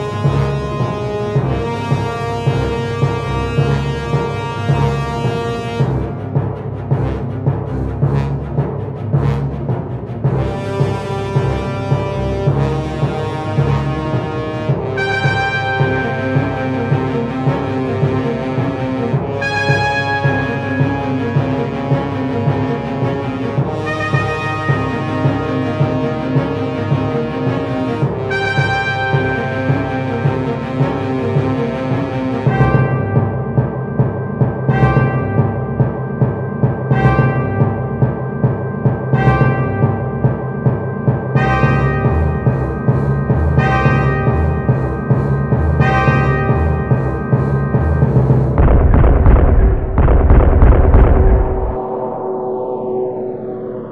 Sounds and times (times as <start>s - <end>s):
Timpani: 0.0s - 53.9s.